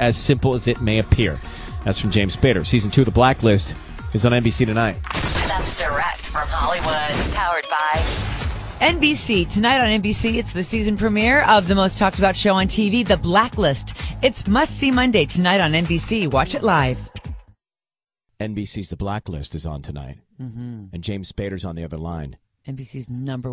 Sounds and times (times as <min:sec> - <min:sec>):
Speech: 0:00.0 - 0:08.0, 0:08.8 - 0:17.0, 0:18.4 - 0:23.5
Music: 0:00.0 - 0:17.6.